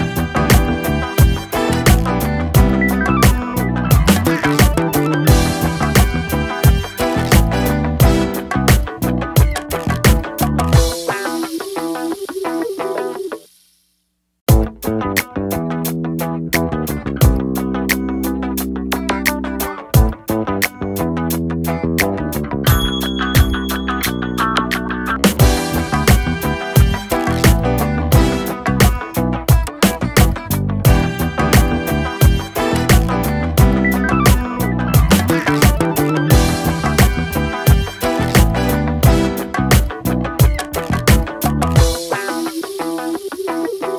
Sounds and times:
Music: 0.0 - 43.9.

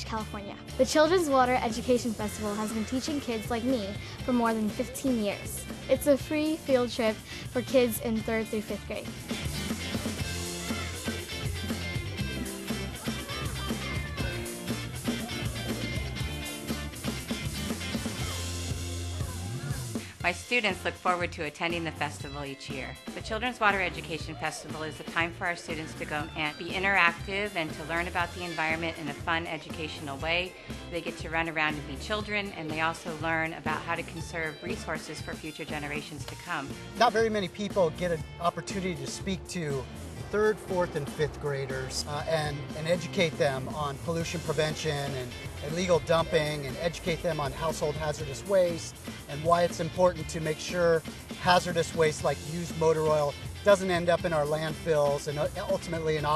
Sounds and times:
Music: 0.0 - 56.3
Speech: 20.2 - 39.8, 40.4 - 56.3.

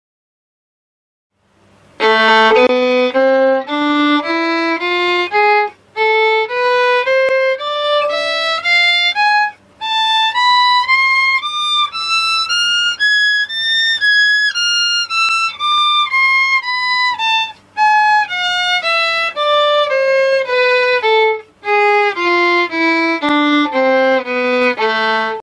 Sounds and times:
Musical instrument: 2.0 - 25.4.

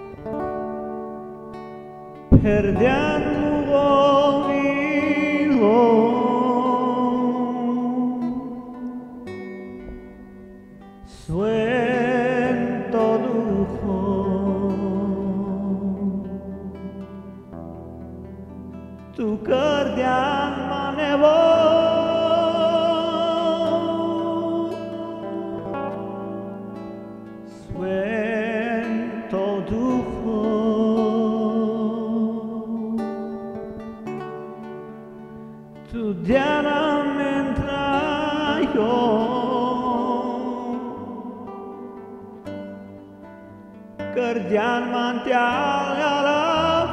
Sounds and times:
Music: 0.0 - 46.9
Male singing: 2.3 - 9.4, 11.1 - 17.0, 19.1 - 26.2, 27.5 - 33.6, 35.9 - 42.3, 44.1 - 46.9.

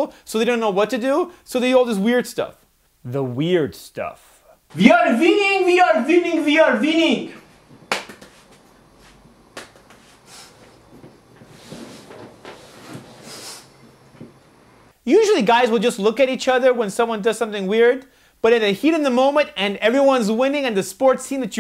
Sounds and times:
Male speech, man speaking: 0.0 - 7.4, 15.1 - 21.6.

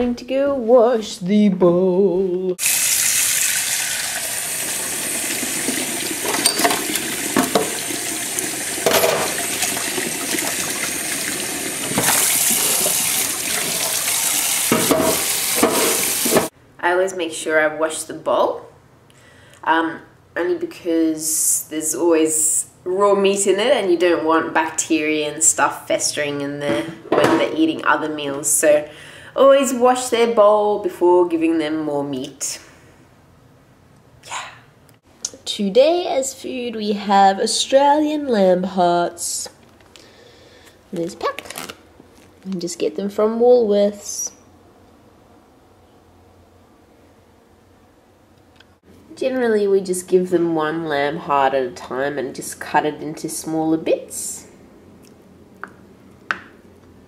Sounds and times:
Water: 5.3 - 15.0.

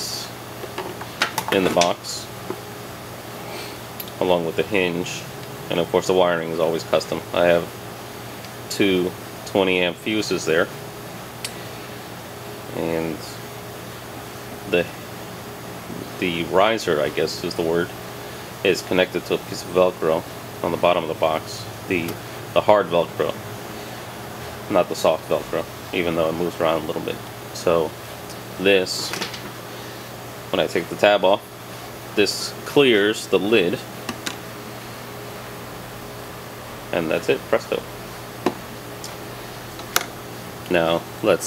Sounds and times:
Speech: 0.0 - 0.4, 1.5 - 2.3, 4.2 - 7.7, 8.7 - 10.7, 12.7 - 13.4, 14.7 - 15.0, 16.1 - 18.0, 18.6 - 23.4, 24.7 - 28.0, 28.6 - 29.3, 30.5 - 31.5, 32.2 - 33.9, 36.9 - 37.9, 40.7 - 41.4.

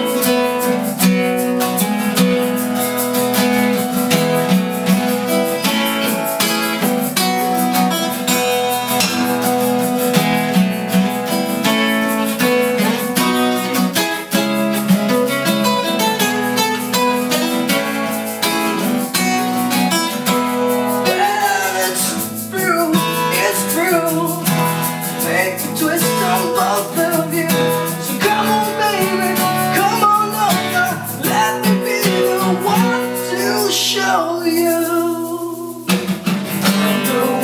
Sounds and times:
Guitar: 0.0 - 37.4.

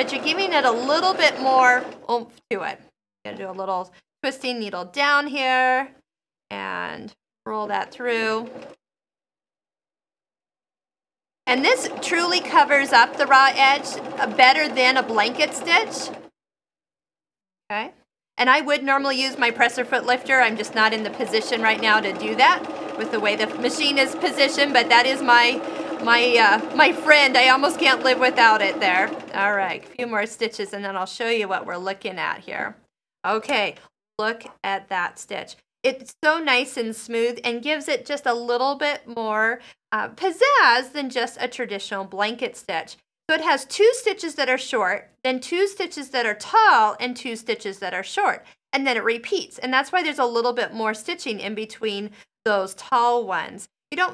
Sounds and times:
Speech: 0.0 - 8.5, 11.5 - 16.1, 17.7 - 54.1.

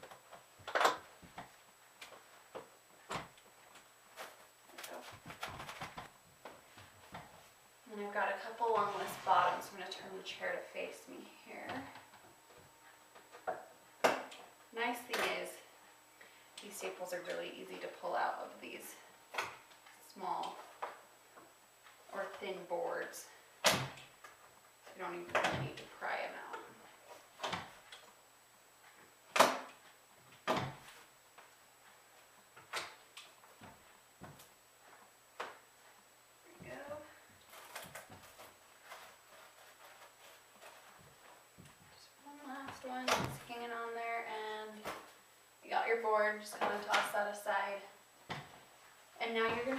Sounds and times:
Speech: 7.9 - 12.0, 14.8 - 15.7, 16.6 - 19.0, 22.1 - 23.4, 24.9 - 26.8, 36.5 - 37.2, 42.0 - 44.9, 45.6 - 48.0, 49.2 - 49.7.

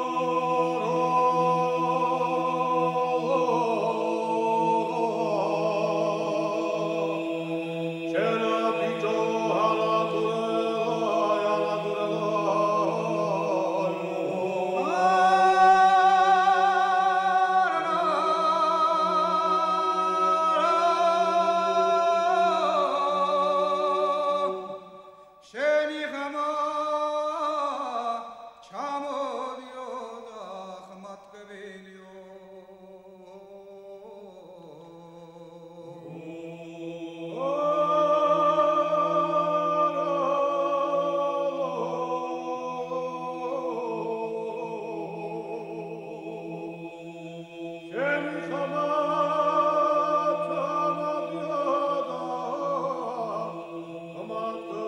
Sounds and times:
Choir: 0.0 - 54.8.

